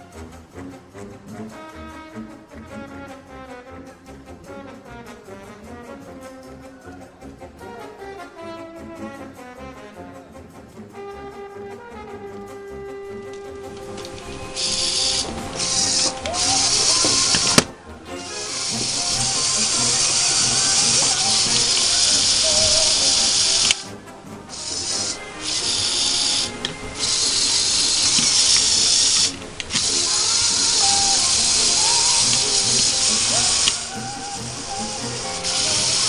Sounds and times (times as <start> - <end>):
Music: 0.0 - 36.0.